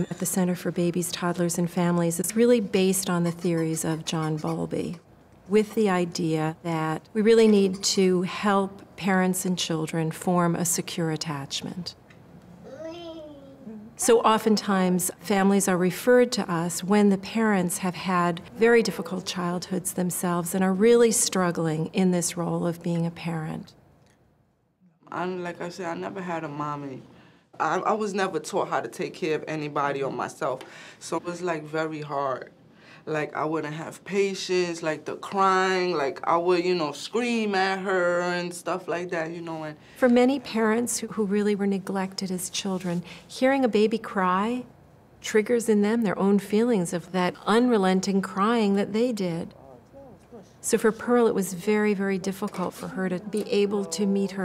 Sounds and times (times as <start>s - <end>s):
Speech: 0.0s - 11.9s, 13.6s - 23.7s, 33.1s - 44.7s, 45.3s - 49.6s, 50.4s - 54.4s.